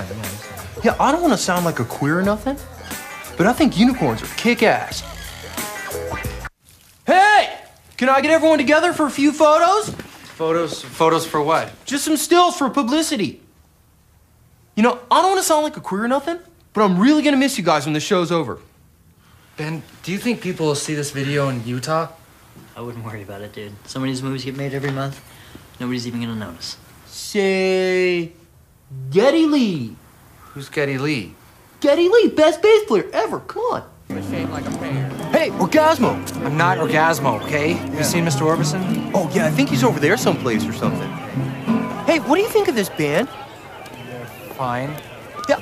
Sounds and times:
Speech: 30.6 - 41.2.

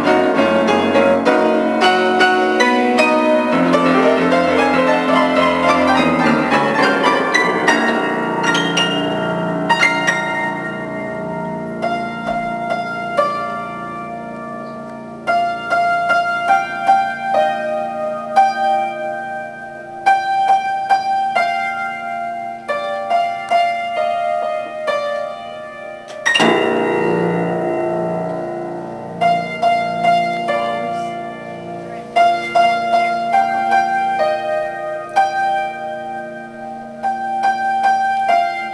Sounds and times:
Piano: 0.0 - 38.7.

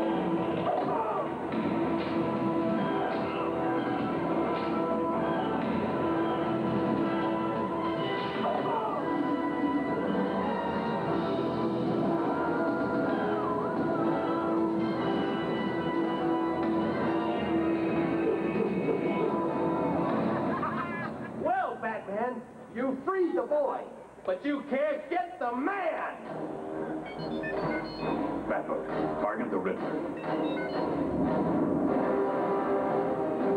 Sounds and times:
Music: 0.0 - 21.5, 25.5 - 33.5.

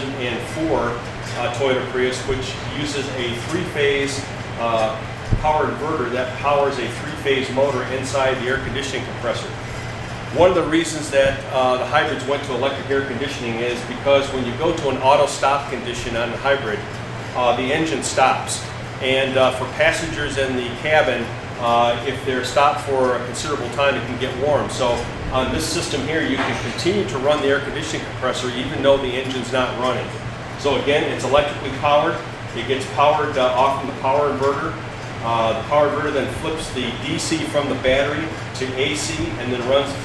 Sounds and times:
Speech: 0.0 - 9.6, 10.3 - 40.0
Air conditioning: 0.0 - 40.0.

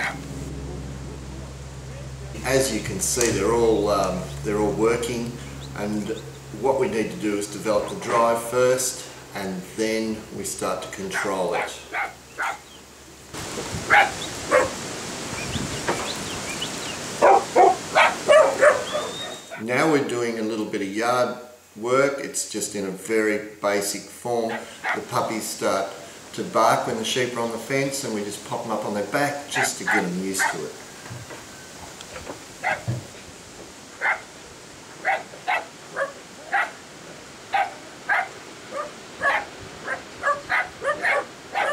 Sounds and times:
Outside, rural or natural: 0.0 - 41.7
Speech: 1.9 - 11.9, 19.6 - 30.8
Dog: 11.2 - 12.6, 13.9 - 14.7, 17.2 - 19.6, 32.6 - 32.9, 35.0 - 36.8, 37.5 - 41.7.

